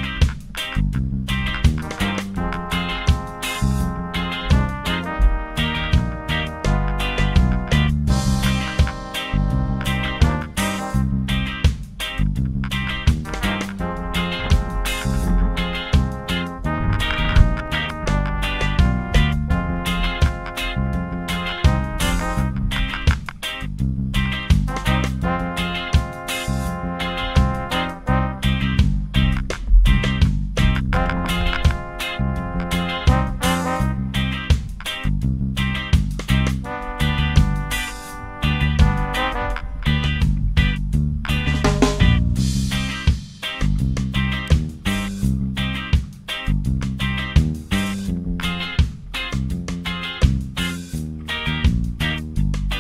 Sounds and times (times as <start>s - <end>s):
Music: 0.0s - 52.8s.